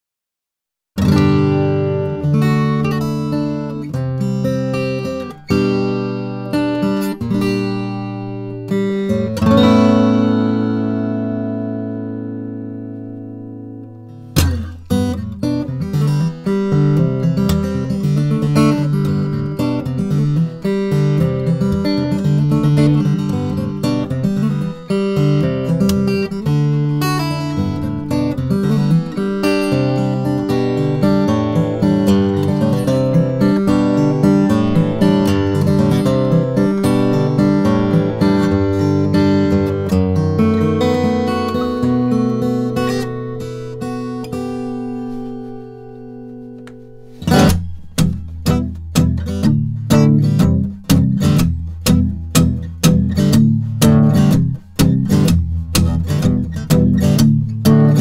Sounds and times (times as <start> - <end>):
Acoustic guitar: 1.0 - 58.0
Strum: 1.0 - 58.0.